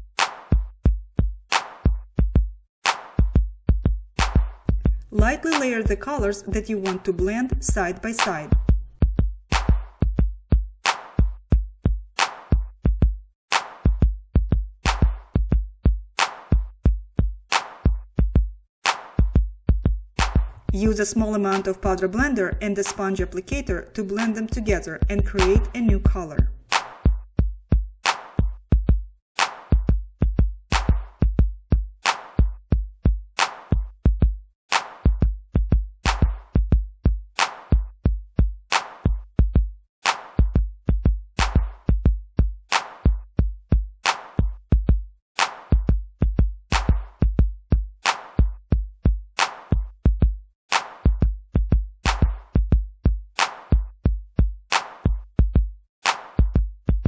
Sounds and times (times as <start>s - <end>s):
Music: 0.0s - 57.0s
Speech: 5.1s - 8.6s, 20.7s - 26.6s.